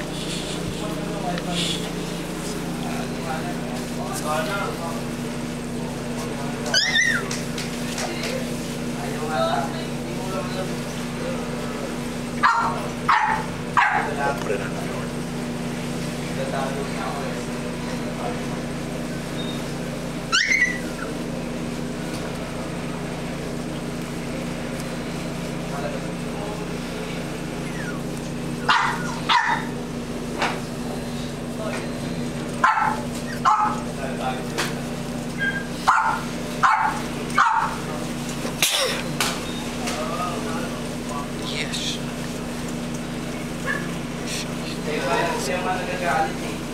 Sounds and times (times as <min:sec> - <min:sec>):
Speech: 0:00.8 - 0:06.9, 0:07.8 - 0:13.1, 0:13.9 - 0:15.3, 0:16.2 - 0:20.0, 0:24.1 - 0:27.6, 0:30.7 - 0:32.6, 0:33.7 - 0:35.1, 0:39.7 - 0:42.4, 0:44.3 - 0:46.7
Bark: 0:12.4 - 0:14.2, 0:28.6 - 0:29.8, 0:32.6 - 0:33.8, 0:35.4 - 0:37.8, 0:43.6 - 0:44.0.